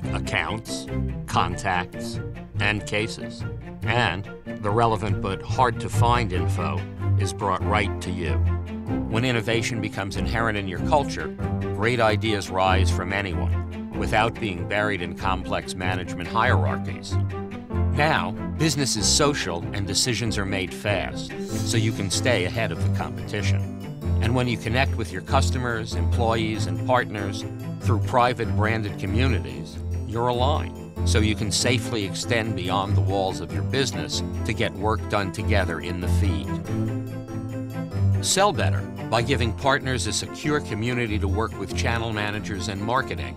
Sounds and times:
Speech: 0:00.0 - 0:08.4, 0:09.1 - 0:17.2, 0:18.0 - 0:23.6, 0:24.2 - 0:36.6, 0:38.2 - 0:43.3
Music: 0:00.0 - 0:43.3.

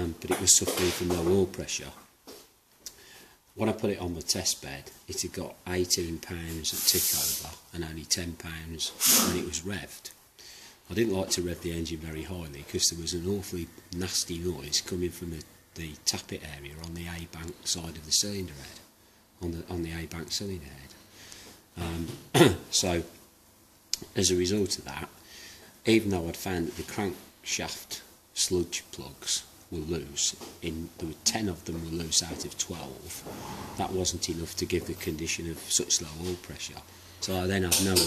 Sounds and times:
Speech: 0:00.0 - 0:02.1, 0:03.6 - 0:10.2, 0:10.9 - 0:21.0, 0:21.8 - 0:23.2, 0:24.0 - 0:25.2, 0:25.8 - 0:38.0.

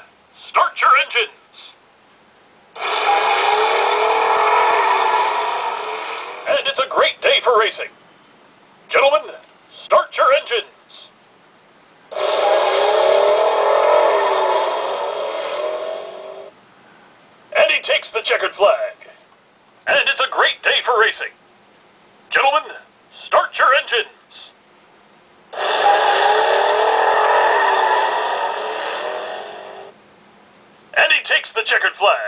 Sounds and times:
Speech: 0:00.0 - 0:01.8, 0:06.5 - 0:08.0, 0:08.9 - 0:11.2, 0:17.6 - 0:19.2, 0:19.9 - 0:21.4, 0:22.3 - 0:24.6, 0:31.0 - 0:32.2.

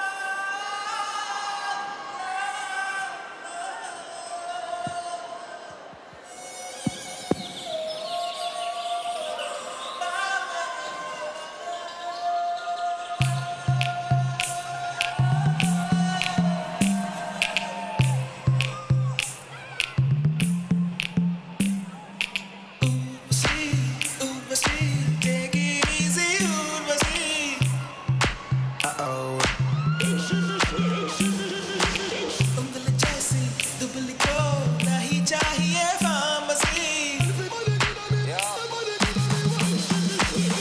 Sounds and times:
Music: 0:05.8 - 0:40.6.

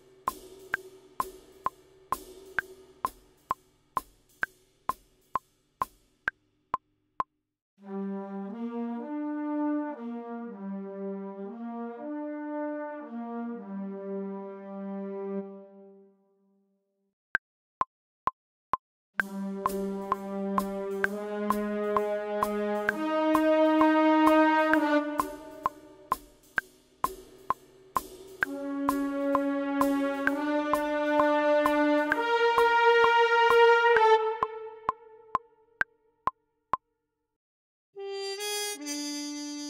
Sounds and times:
Music: 0:00.0 - 0:06.9, 0:07.8 - 0:17.0, 0:19.2 - 0:36.4, 0:38.0 - 0:39.6.

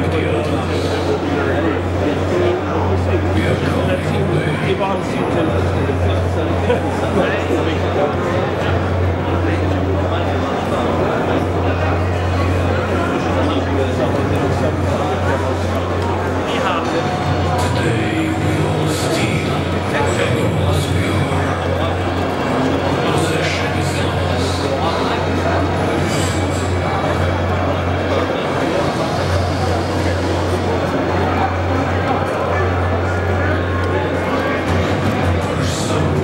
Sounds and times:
Crowd: 0:00.0 - 0:36.2
Speech: 0:00.0 - 0:36.2.

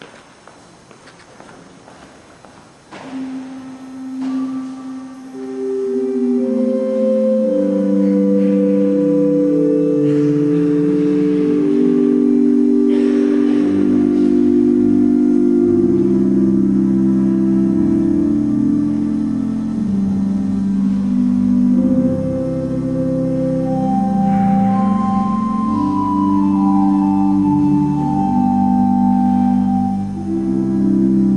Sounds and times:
Musical instrument: 0:03.0 - 0:31.3.

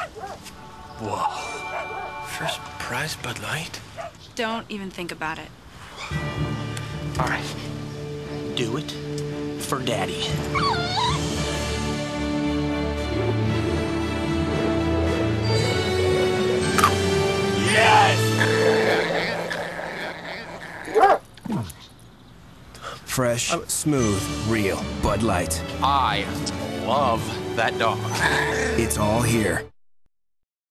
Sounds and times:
Music: 0:00.4 - 0:03.8, 0:06.0 - 0:19.4, 0:23.5 - 0:29.8
Bow-wow: 0:20.3 - 0:21.7.

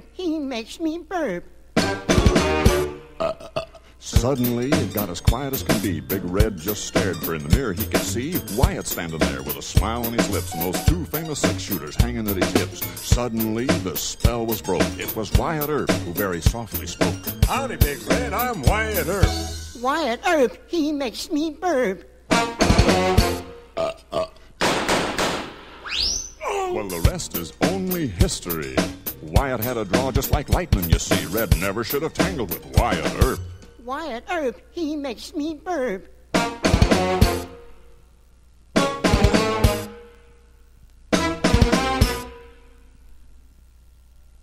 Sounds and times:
Speech: 0:00.0 - 0:01.5, 0:04.0 - 0:22.1, 0:26.4 - 0:36.1
Music: 0:01.8 - 0:03.2, 0:04.0 - 0:19.8, 0:22.3 - 0:23.7, 0:26.7 - 0:33.9, 0:36.3 - 0:37.9, 0:38.8 - 0:40.3, 0:41.1 - 0:42.8.

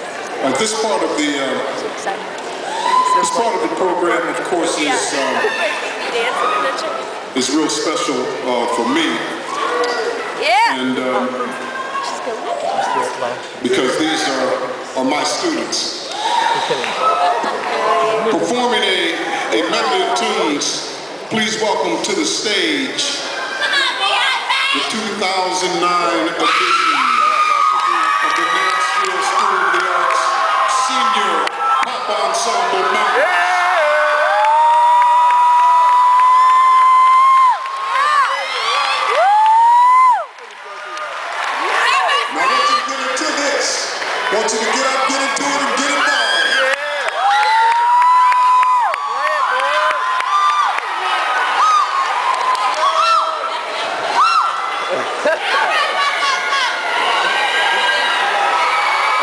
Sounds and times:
Crowd: 0:00.0 - 0:59.2.

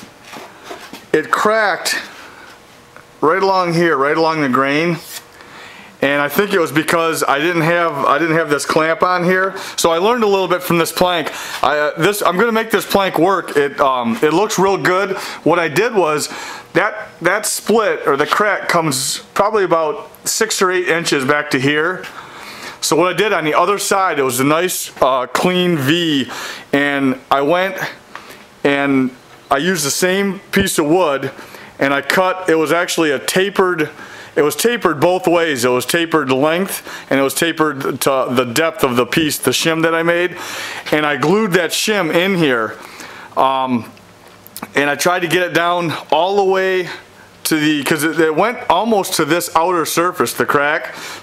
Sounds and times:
Speech: 0:01.1 - 0:02.2, 0:03.2 - 0:05.2, 0:06.0 - 0:22.2, 0:22.8 - 0:28.0, 0:28.6 - 0:42.8, 0:43.4 - 0:44.0, 0:44.6 - 0:51.0.

